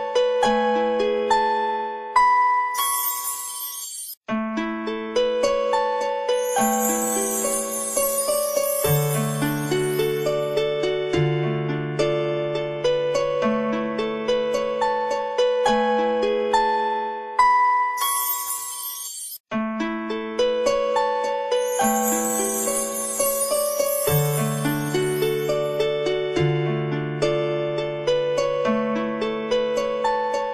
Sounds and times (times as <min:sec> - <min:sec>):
Music: 0:00.0 - 0:30.5.